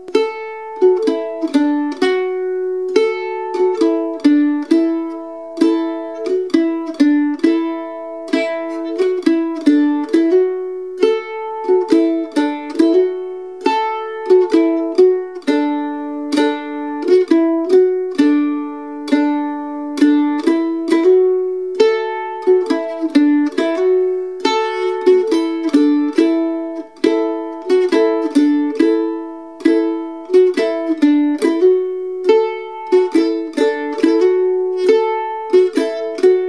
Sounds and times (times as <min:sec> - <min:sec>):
Pizzicato: 0:00.0 - 0:36.4.